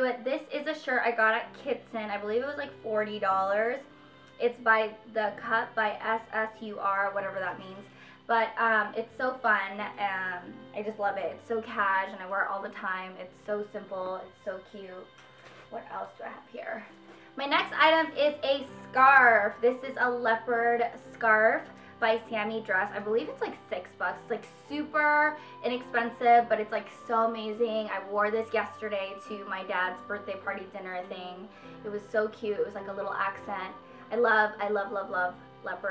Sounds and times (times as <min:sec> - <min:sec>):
Speech: 0:00.0 - 0:03.8, 0:04.4 - 0:15.1, 0:15.7 - 0:35.9
Inside, small room: 0:00.0 - 0:35.9
Music: 0:00.0 - 0:35.9.